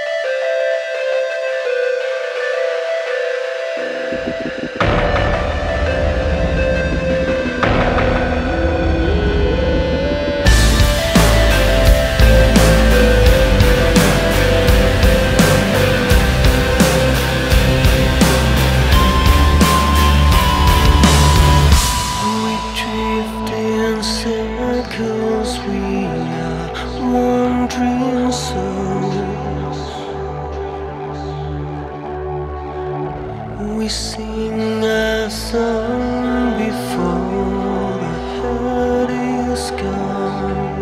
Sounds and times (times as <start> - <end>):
Music: 0.0 - 40.8.